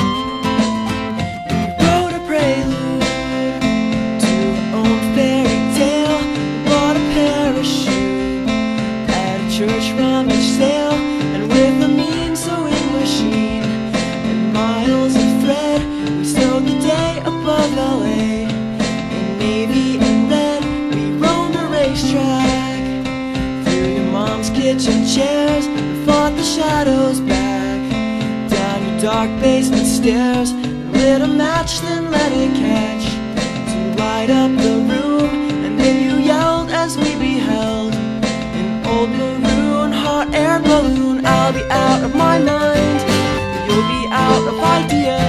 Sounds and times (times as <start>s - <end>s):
Music: 0.0s - 45.2s.